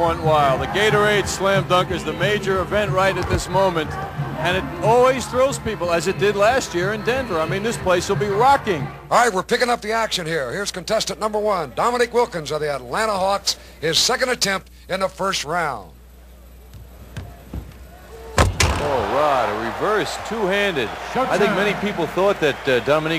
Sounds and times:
Speech: 0.0 - 16.0, 18.9 - 23.1.

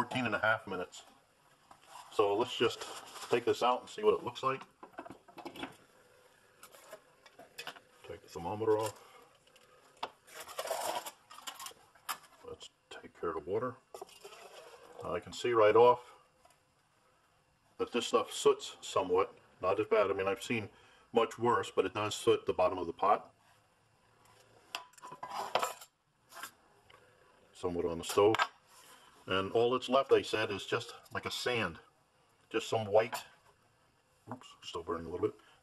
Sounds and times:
Speech: 0.0 - 1.1, 2.1 - 4.7, 8.0 - 9.0, 12.4 - 13.8, 15.0 - 16.2, 17.8 - 23.3, 27.6 - 28.4, 29.3 - 31.9, 32.5 - 33.4, 34.3 - 35.4
Boiling: 0.0 - 15.4.

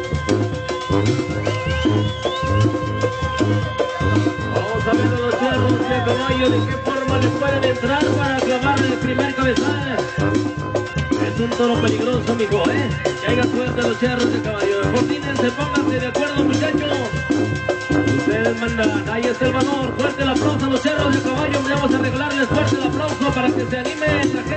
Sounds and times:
Trumpet: 0.0 - 24.5.

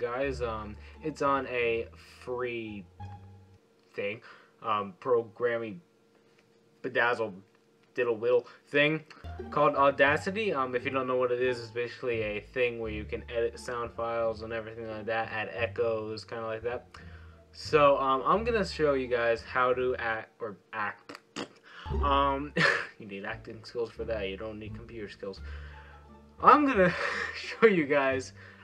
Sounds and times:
Speech: 0.0 - 2.9, 3.9 - 5.8, 6.8 - 7.4, 8.0 - 16.8, 17.6 - 25.4, 26.4 - 28.4.

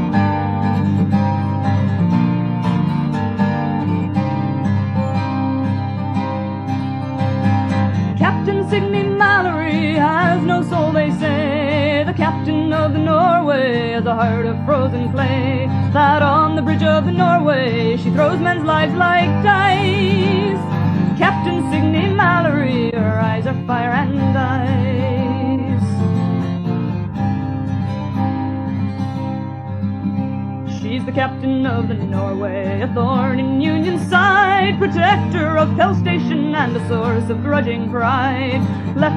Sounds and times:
Music: 0.0 - 39.1.

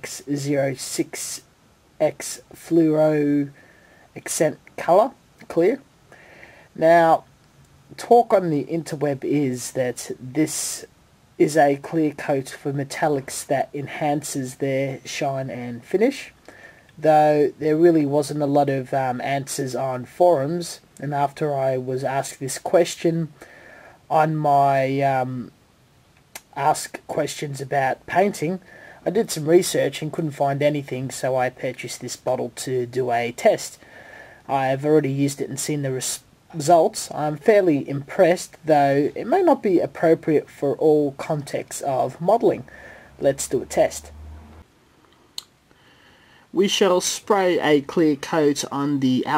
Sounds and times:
Speech: 0.0 - 3.6, 4.2 - 5.9, 6.8 - 7.3, 7.9 - 16.4, 17.0 - 23.4, 24.1 - 25.6, 26.4 - 33.8, 34.5 - 44.1, 46.5 - 49.3.

